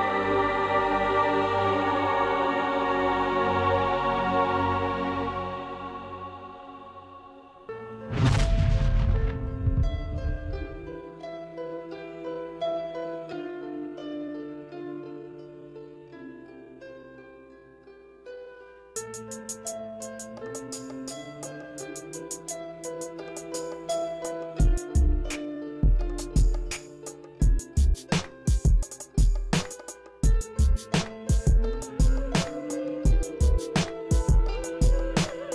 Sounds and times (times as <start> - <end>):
Music: 0.0 - 35.5.